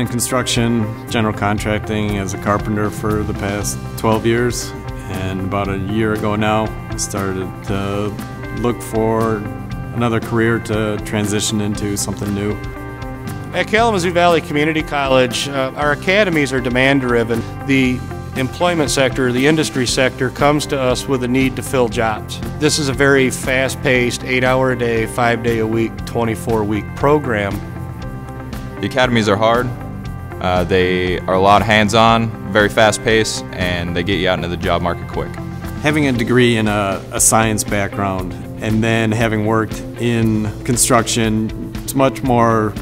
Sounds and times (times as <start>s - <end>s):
Speech: 0.0s - 12.6s, 13.6s - 27.6s, 28.8s - 29.8s, 30.4s - 42.8s
Music: 0.0s - 42.8s.